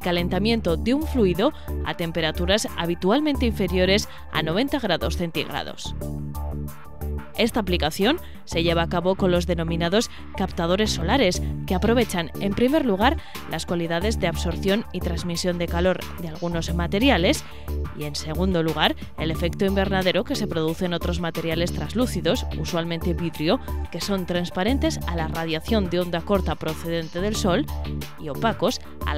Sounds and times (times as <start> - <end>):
Speech: 0.0 - 5.9, 7.4 - 17.4, 18.0 - 29.1
Music: 0.0 - 29.1.